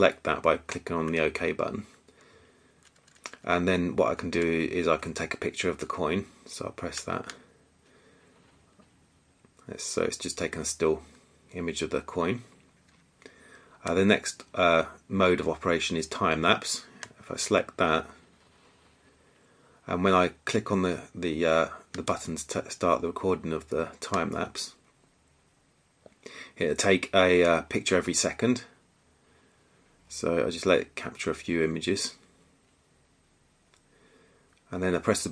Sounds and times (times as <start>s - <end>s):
Speech: 0.0s - 2.0s, 3.3s - 7.4s, 9.6s - 12.5s, 13.8s - 18.2s, 19.8s - 24.8s, 26.6s - 28.8s, 30.1s - 32.2s, 34.7s - 35.3s.